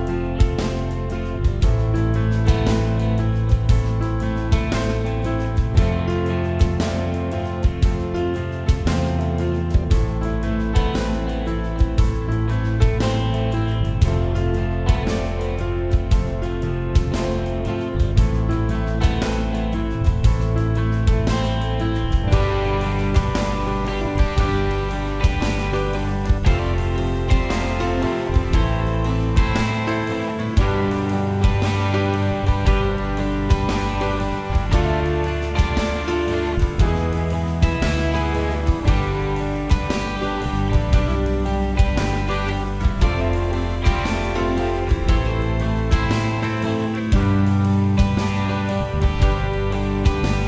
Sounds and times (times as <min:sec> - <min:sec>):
Music: 0:00.0 - 0:50.4.